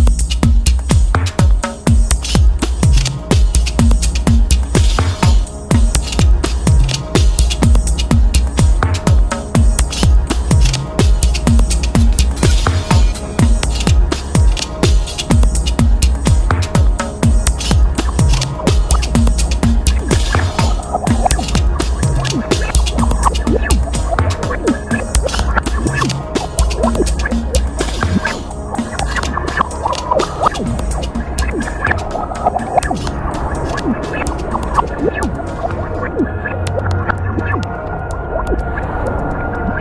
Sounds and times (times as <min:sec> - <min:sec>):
Music: 0:00.0 - 0:39.8.